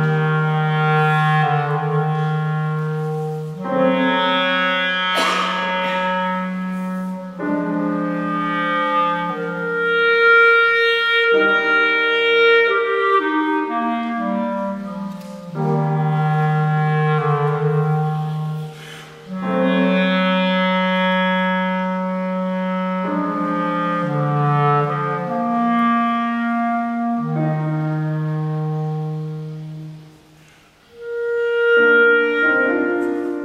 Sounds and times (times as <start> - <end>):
Piano: 0.0 - 33.4.